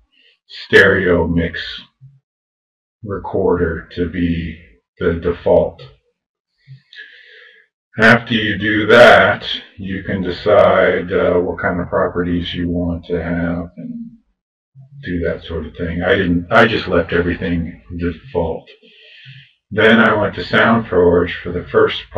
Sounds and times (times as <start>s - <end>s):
Speech: 0.5s - 1.8s, 3.1s - 5.9s, 6.9s - 14.1s, 15.0s - 22.1s.